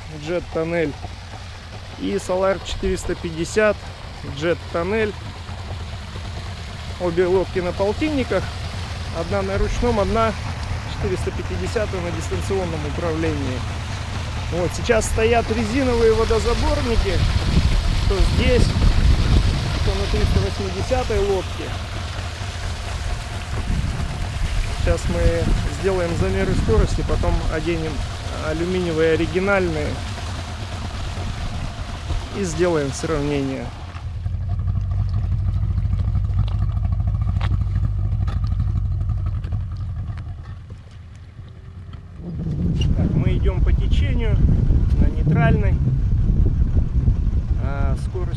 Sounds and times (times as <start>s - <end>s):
Speech: 0.0s - 1.0s, 2.0s - 5.2s, 7.0s - 8.5s, 9.1s - 13.7s, 14.5s - 17.2s, 18.1s - 18.8s, 19.8s - 21.8s, 24.8s - 30.0s, 32.3s - 33.8s, 43.0s - 44.4s, 45.0s - 45.8s, 47.6s - 48.3s
Motorboat, speedboat: 0.0s - 48.3s.